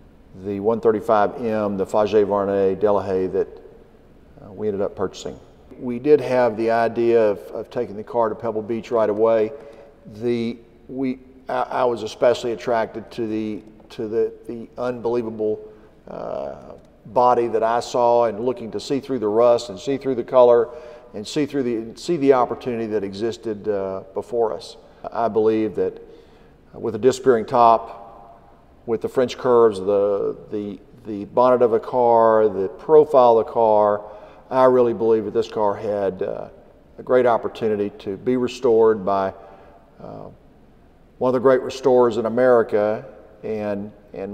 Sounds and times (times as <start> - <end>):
Speech: 0.4 - 3.6, 4.4 - 26.0, 26.7 - 28.0, 28.9 - 39.4, 40.0 - 40.4, 41.2 - 44.3.